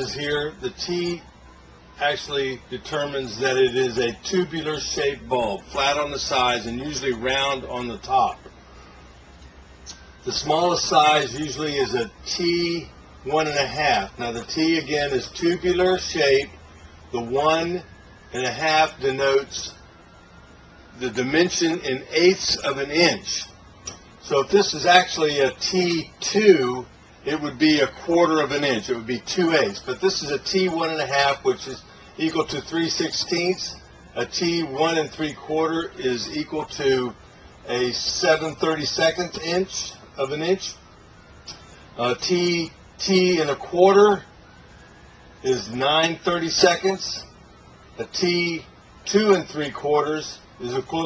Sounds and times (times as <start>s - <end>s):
Speech: 0.0s - 1.3s, 2.0s - 8.4s, 10.2s - 16.6s, 17.2s - 19.8s, 21.0s - 23.6s, 24.2s - 40.8s, 42.0s - 44.3s, 45.4s - 47.4s, 48.0s - 51.0s.